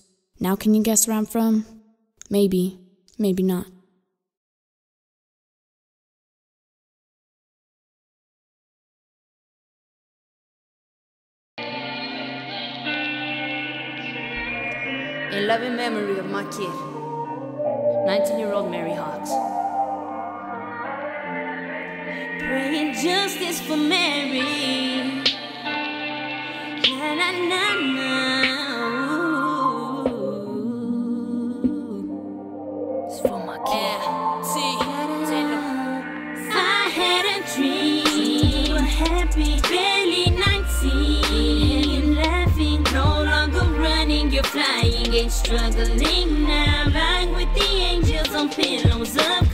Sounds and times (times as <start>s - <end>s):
Music: 11.6s - 49.5s.